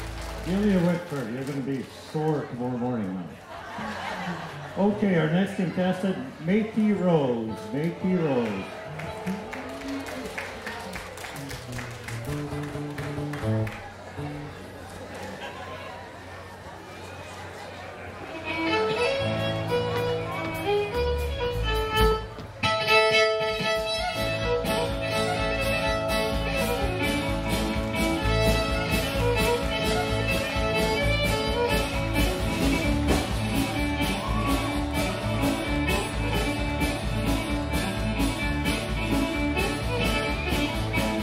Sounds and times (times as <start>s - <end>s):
Violin, fiddle: 18.3s - 41.2s.